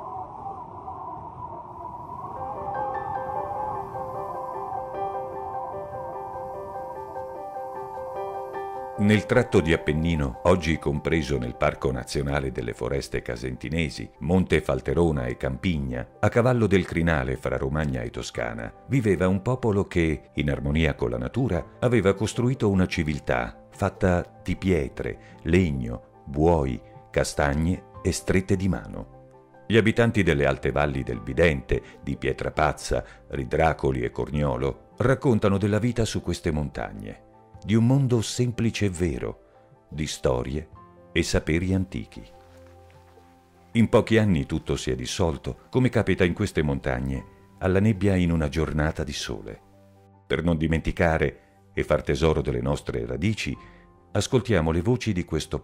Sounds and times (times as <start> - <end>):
Music: 2.2 - 55.6
Speech: 9.0 - 29.1, 29.7 - 42.4, 43.8 - 49.6, 50.3 - 53.6, 54.2 - 55.6.